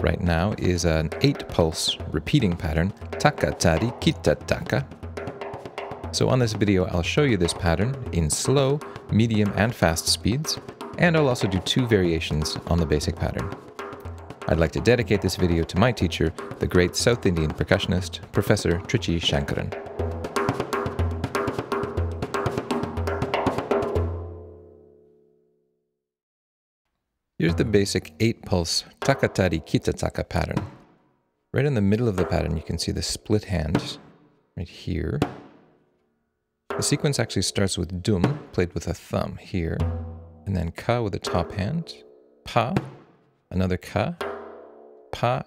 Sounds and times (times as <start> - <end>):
Speech: 0.0 - 4.9, 6.2 - 13.6, 14.5 - 19.8, 27.4 - 30.7, 31.6 - 34.0, 34.6 - 35.3, 36.8 - 39.9, 40.5 - 42.9, 43.5 - 44.2, 45.2 - 45.4
Drum roll: 0.0 - 24.4, 27.4 - 30.8, 31.8 - 34.1, 36.7 - 43.1.